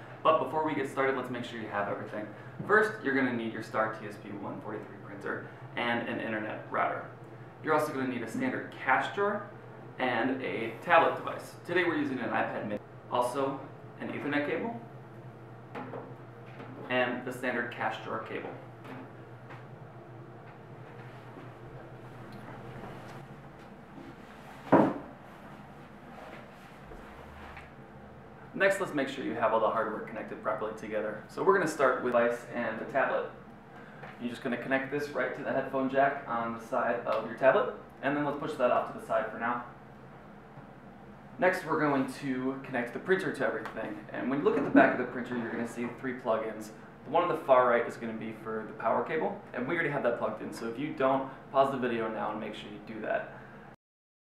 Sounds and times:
Speech: 0:00.2 - 0:14.9, 0:16.8 - 0:18.6, 0:28.6 - 0:33.4, 0:34.2 - 0:39.8, 0:41.4 - 0:53.4.

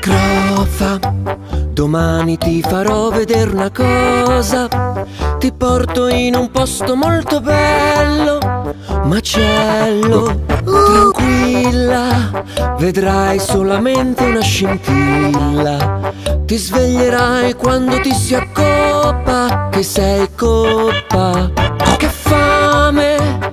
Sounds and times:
Music: 0:00.0 - 0:23.5
Oink: 0:21.8 - 0:22.4.

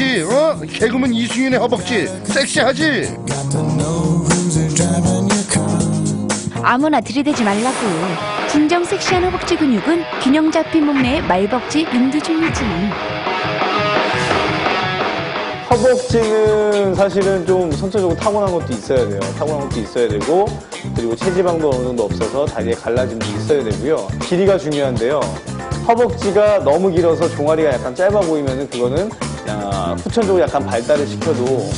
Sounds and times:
Speech: 0:00.0 - 0:03.1, 0:15.7 - 0:31.7
Music: 0:00.0 - 0:31.7.

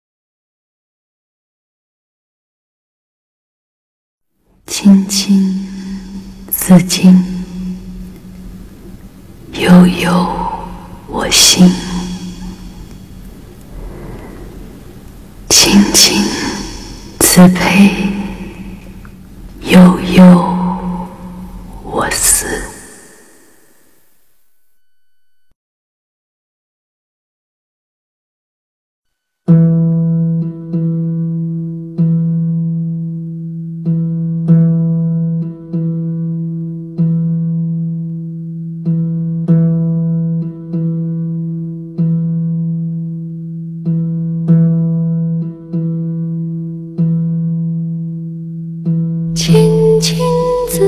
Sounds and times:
Music: 0:04.4 - 0:25.6, 0:29.1 - 0:50.8.

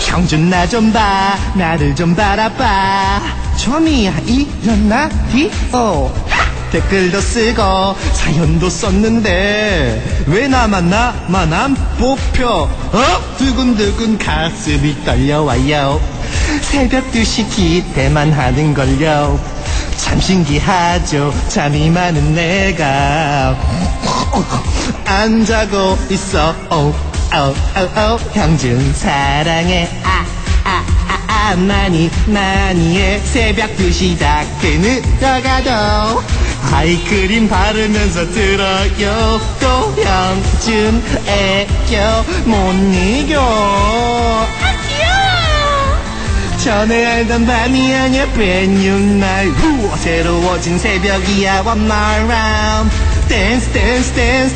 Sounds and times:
Music: 0:00.0 - 0:54.5.

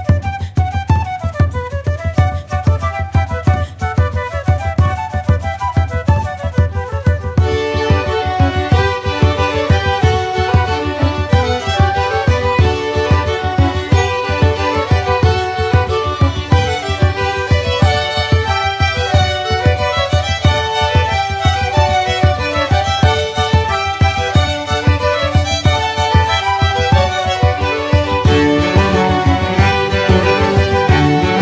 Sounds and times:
Music: 0:00.0 - 0:31.4.

